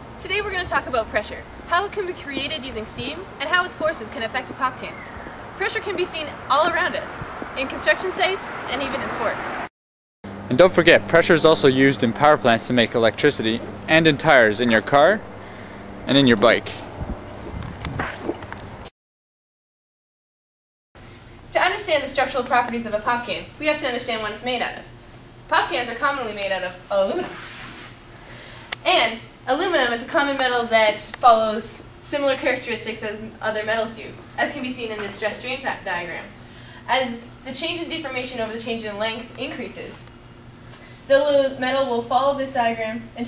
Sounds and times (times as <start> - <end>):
Speech: 0.2 - 5.0, 5.6 - 9.5, 10.5 - 15.2, 16.1 - 16.8, 21.6 - 24.9, 25.5 - 27.4, 28.8 - 40.0, 41.1 - 43.2.